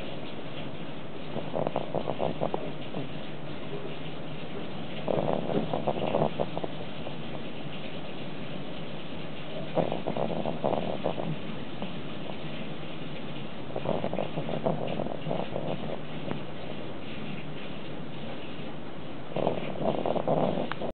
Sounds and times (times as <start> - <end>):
Domestic animals, pets: 0.8 - 18.7, 19.3 - 20.9.